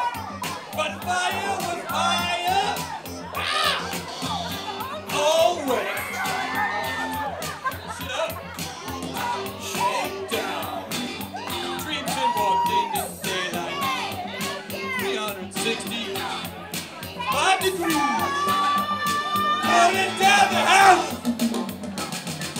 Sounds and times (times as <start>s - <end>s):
Music: 0.0s - 22.5s
Male singing: 9.2s - 10.9s, 11.7s - 14.0s, 14.9s - 16.5s, 19.6s - 21.1s.